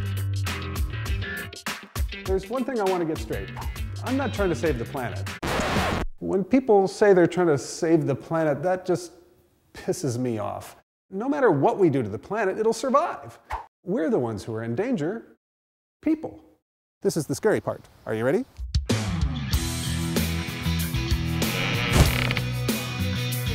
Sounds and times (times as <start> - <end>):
Music: 0.0 - 6.0, 18.6 - 23.5
Speech: 2.3 - 5.2, 6.2 - 9.2, 9.8 - 15.4, 16.0 - 18.5.